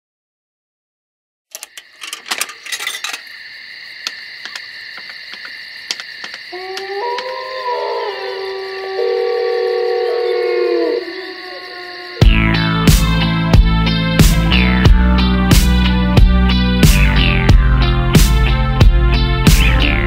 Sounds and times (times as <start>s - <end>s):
Outside, rural or natural: 1.5s - 20.0s.